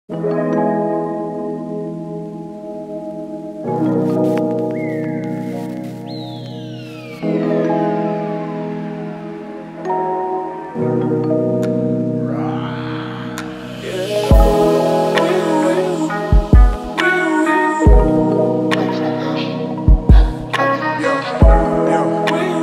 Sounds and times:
Music: 0.1 - 22.6.

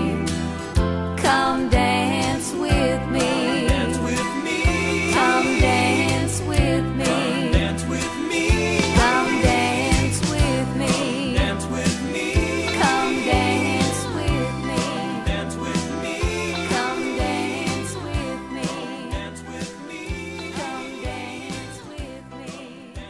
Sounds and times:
Happy music: 0.0 - 23.1.

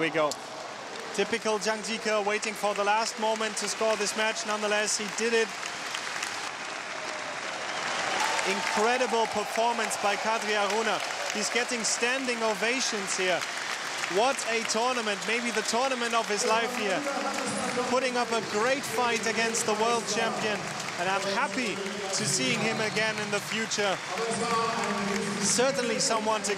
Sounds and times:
Male speech, man speaking: 0.0 - 0.4, 1.2 - 5.5, 8.4 - 13.4, 14.0 - 26.5.

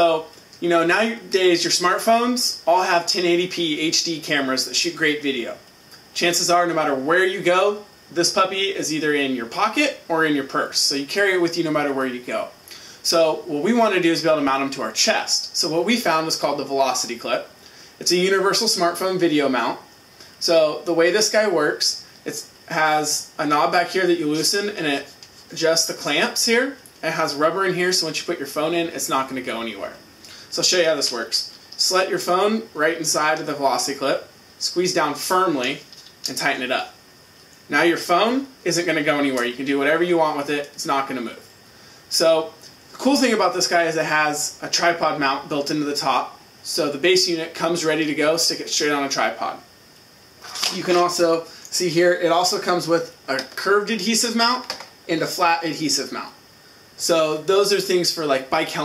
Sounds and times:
Speech: 0.0 - 37.0, 37.7 - 41.5, 42.1 - 49.7, 50.5 - 56.4, 57.0 - 58.8.

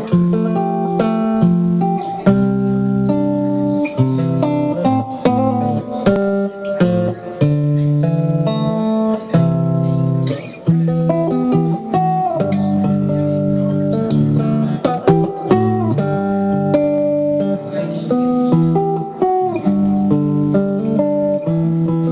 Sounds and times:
Speech: 0.0 - 20.1
Electric guitar: 0.0 - 22.1
Strum: 0.0 - 22.1.

